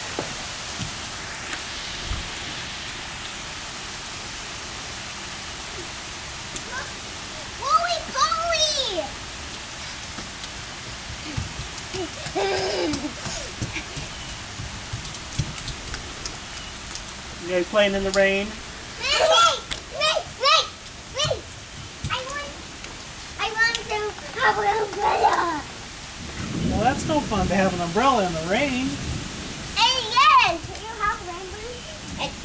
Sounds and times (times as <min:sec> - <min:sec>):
Rain: 0:00.0 - 0:32.4.